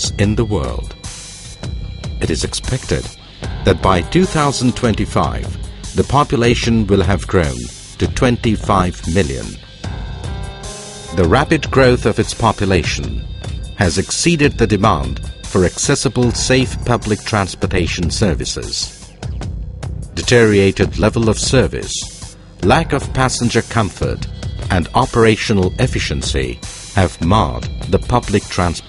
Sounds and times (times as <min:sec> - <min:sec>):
Speech: 0:00.0 - 0:00.9, 0:02.2 - 0:09.6, 0:11.1 - 0:13.2, 0:13.8 - 0:19.0, 0:20.2 - 0:28.8
Music: 0:00.0 - 0:28.8.